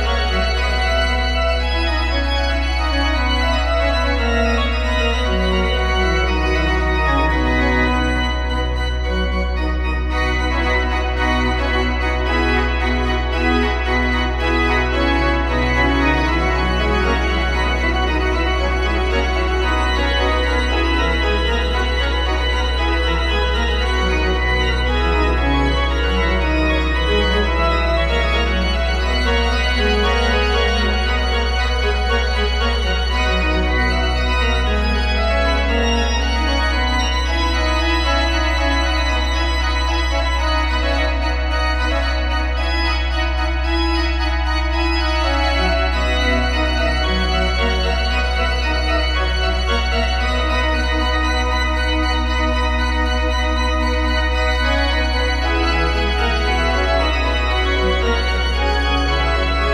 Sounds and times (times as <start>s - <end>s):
Piano: 0.0s - 59.7s.